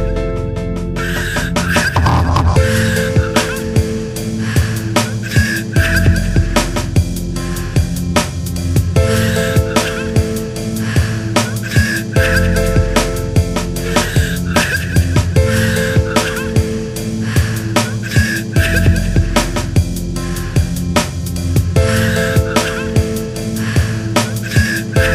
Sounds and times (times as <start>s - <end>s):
Ambient music: 0.0s - 25.1s.